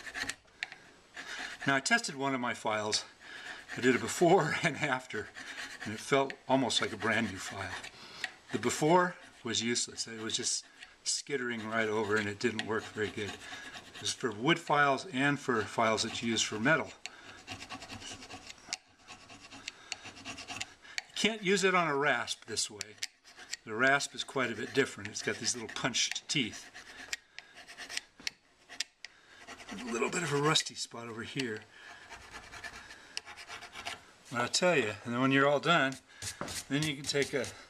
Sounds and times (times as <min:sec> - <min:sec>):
Filing (rasp): 0:00.0 - 0:00.4, 0:01.1 - 0:02.1, 0:03.4 - 0:10.8, 0:11.4 - 0:14.7, 0:15.5 - 0:21.2, 0:22.6 - 0:30.7, 0:31.9 - 0:34.0, 0:35.9 - 0:37.6
Rub: 0:00.0 - 0:00.4, 0:01.1 - 0:21.2, 0:22.2 - 0:30.7, 0:31.9 - 0:34.0, 0:35.9 - 0:37.6.